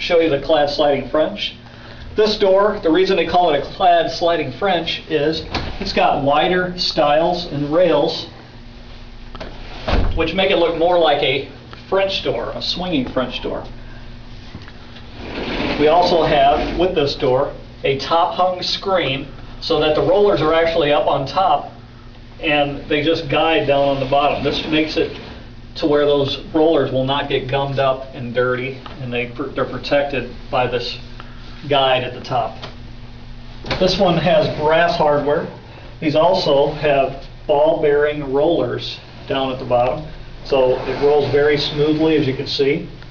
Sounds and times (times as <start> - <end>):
Speech: 0.0 - 1.6, 2.2 - 8.4, 10.2 - 13.7, 15.8 - 21.8, 22.4 - 25.2, 25.8 - 32.7, 33.7 - 43.0
Sliding door: 15.2 - 17.2, 23.2 - 25.5, 33.8 - 35.0, 40.5 - 42.5.